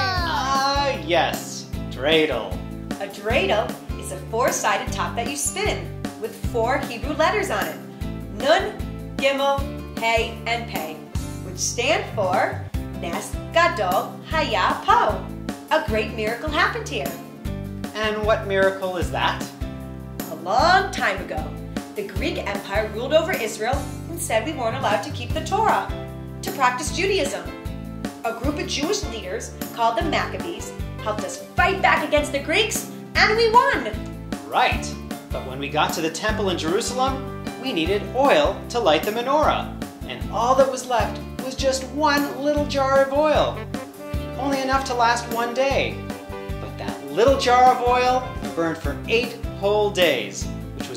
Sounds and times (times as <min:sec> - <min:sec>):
Music: 0:00.0 - 0:50.9.